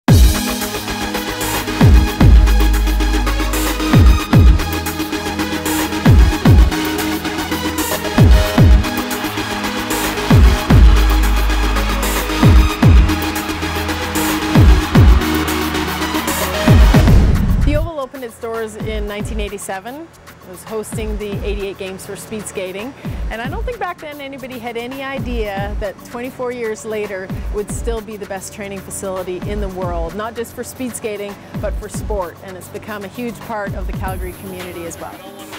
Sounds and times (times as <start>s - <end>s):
Techno: 0.1s - 18.0s, 33.1s - 35.5s
Trance music: 0.1s - 18.0s, 33.2s - 35.5s.